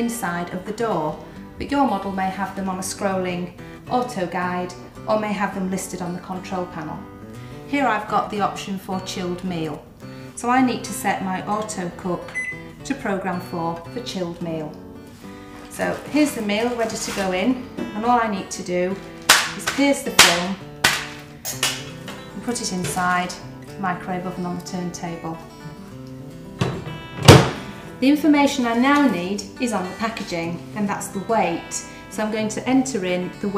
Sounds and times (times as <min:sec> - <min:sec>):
Speech: 0:00.0 - 0:07.0, 0:07.7 - 0:09.8, 0:10.4 - 0:12.2, 0:12.9 - 0:14.8, 0:15.7 - 0:19.0, 0:19.6 - 0:20.6, 0:22.4 - 0:25.4, 0:28.0 - 0:33.5
Music: 0:00.0 - 0:33.5.